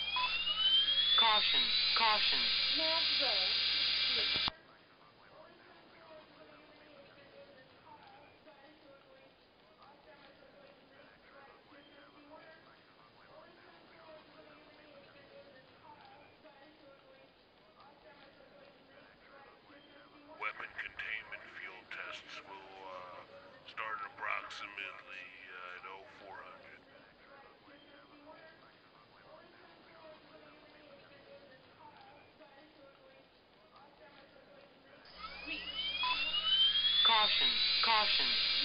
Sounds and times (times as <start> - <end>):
Speech: 1.2 - 3.5, 4.2 - 35.0, 37.1 - 38.6.